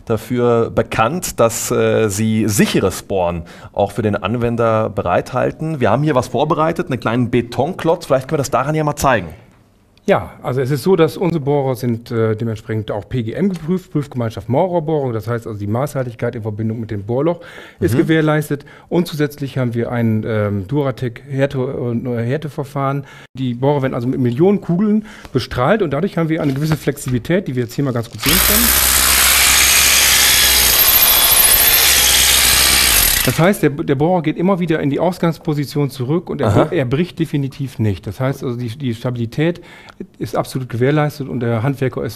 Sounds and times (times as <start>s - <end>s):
Drill: 28.2s - 33.6s.